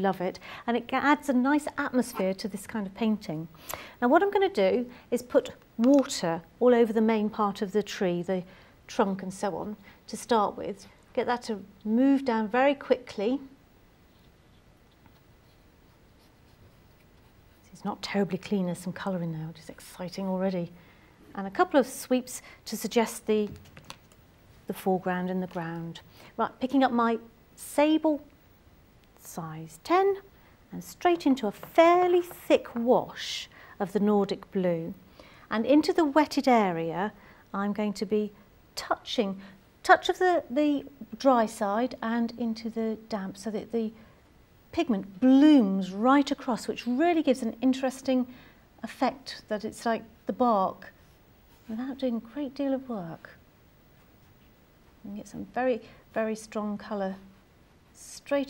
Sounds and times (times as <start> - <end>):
Speech: 0.0 - 13.6, 17.6 - 23.6, 24.7 - 28.3, 29.2 - 44.0, 44.7 - 51.0, 51.7 - 53.4, 55.0 - 57.3, 58.0 - 58.4.